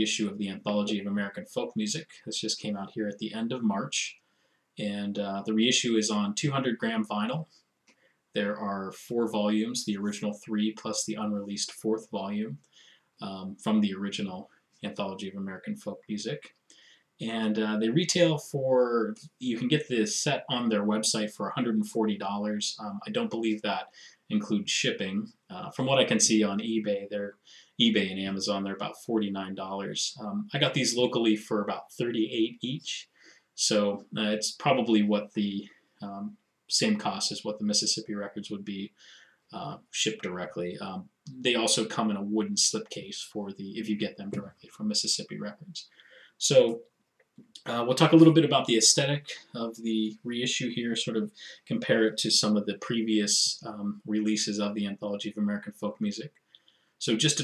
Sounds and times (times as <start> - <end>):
Speech: 0.0 - 4.2, 4.8 - 7.4, 8.4 - 12.6, 13.2 - 16.5, 17.2 - 46.8, 47.5 - 56.3, 57.0 - 57.4.